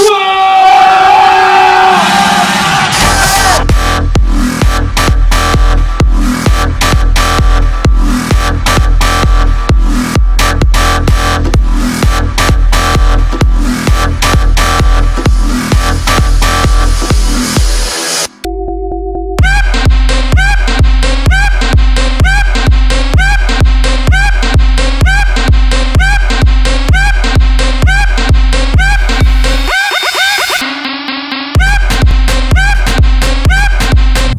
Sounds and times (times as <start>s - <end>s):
Music: 0.3s - 34.3s
Sound effect: 15.7s - 34.3s.